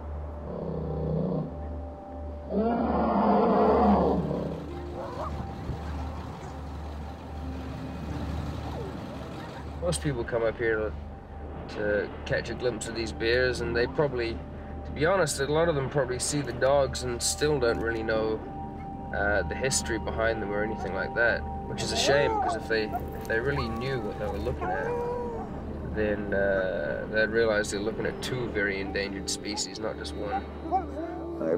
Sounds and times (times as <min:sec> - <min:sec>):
Music: 0:00.0 - 0:31.5
Speech: 0:09.8 - 0:11.0, 0:11.7 - 0:14.4, 0:15.0 - 0:18.4, 0:19.2 - 0:25.0, 0:25.9 - 0:31.5.